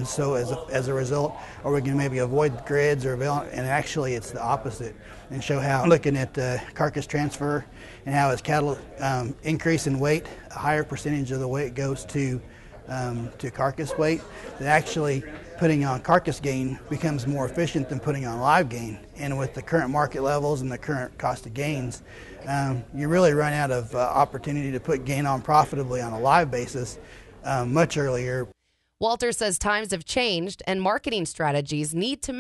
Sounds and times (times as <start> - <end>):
Speech: 0.0 - 32.4.